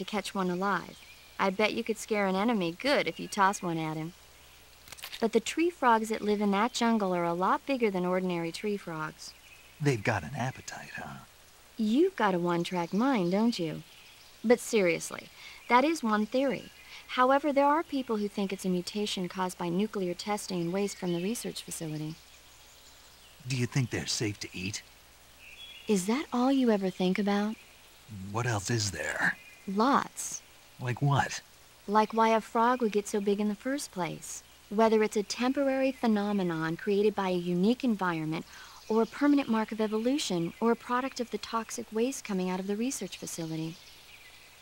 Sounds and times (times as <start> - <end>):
Speech: 0.0 - 4.1, 5.2 - 13.8, 14.5 - 22.2, 23.4 - 24.8, 25.9 - 43.8.